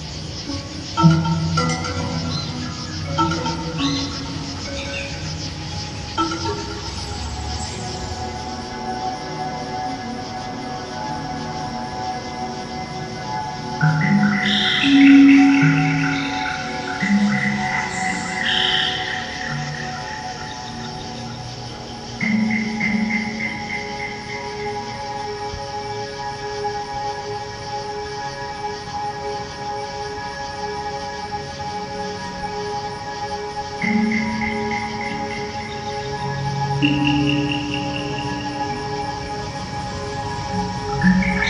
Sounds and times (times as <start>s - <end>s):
Harmonic: 0.0s - 26.9s, 33.3s - 41.5s
Music: 0.0s - 41.5s.